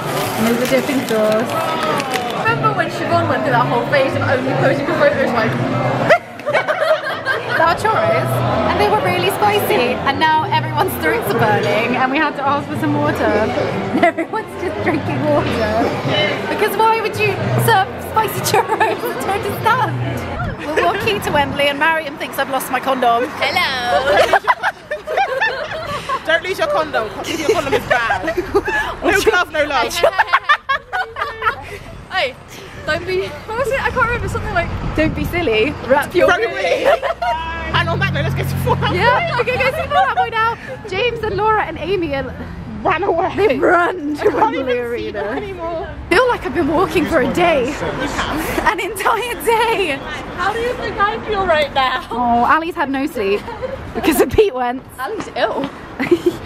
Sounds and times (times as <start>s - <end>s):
Inside, public space: 0.0s - 56.4s.